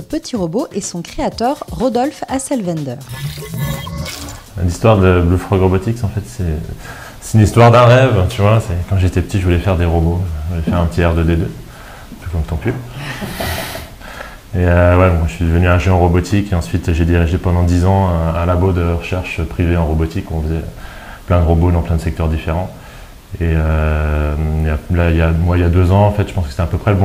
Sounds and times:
Speech: 0:00.0 - 0:03.0, 0:04.6 - 0:11.6, 0:12.2 - 0:12.9, 0:14.5 - 0:20.7, 0:21.3 - 0:27.0
Music: 0:00.0 - 0:11.6.

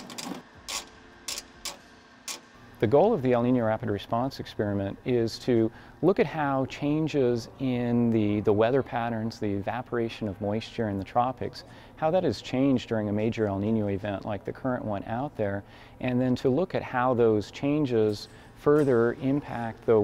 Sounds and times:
Speech: 0:02.8 - 0:20.0.

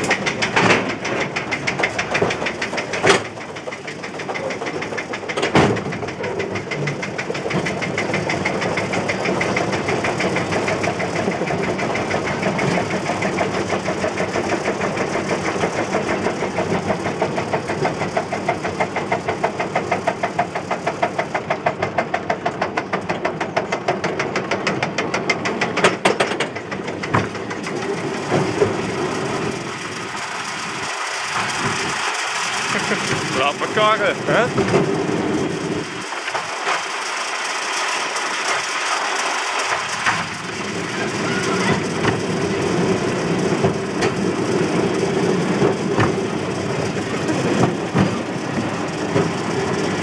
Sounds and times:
Speech: 0:33.4 - 0:34.6.

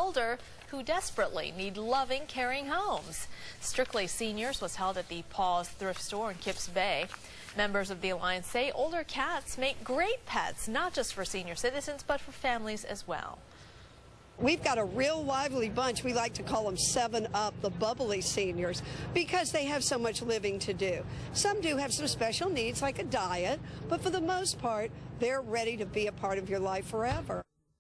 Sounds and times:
Speech: 0:00.0 - 0:13.4, 0:14.4 - 0:27.5.

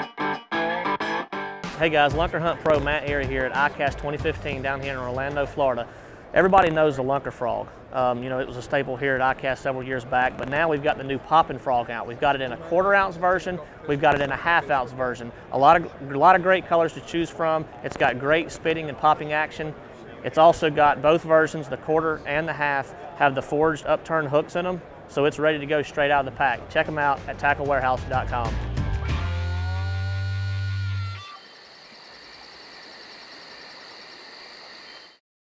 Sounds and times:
Music: 0:00.0 - 0:05.7, 0:26.6 - 0:31.4
Speech: 0:01.8 - 0:28.6.

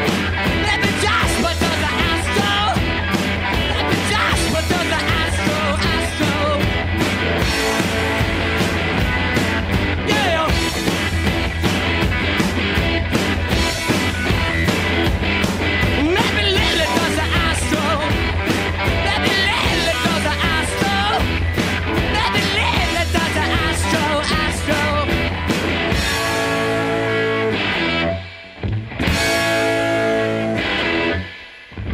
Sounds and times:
Music: 0:00.0 - 0:31.9.

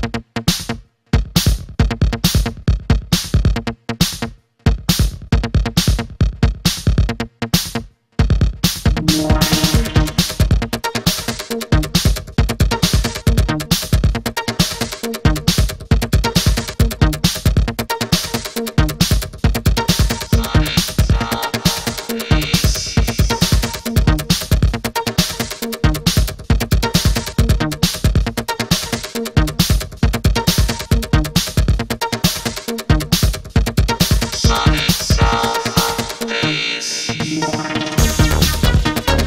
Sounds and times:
Electronica: 0:08.8 - 0:11.0, 0:20.3 - 0:23.6, 0:33.9 - 0:39.2.

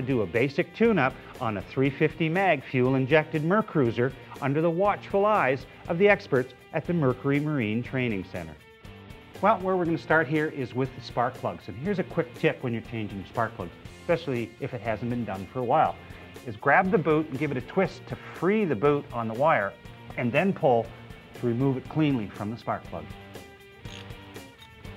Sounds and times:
Speech: 0:00.0 - 0:08.6, 0:09.4 - 0:23.1
Music: 0:00.0 - 0:24.9.

